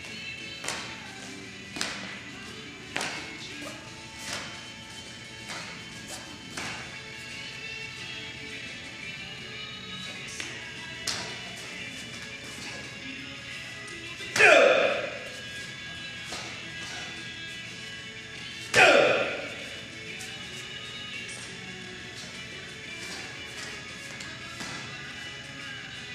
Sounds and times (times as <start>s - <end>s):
Music: 0.0s - 26.1s.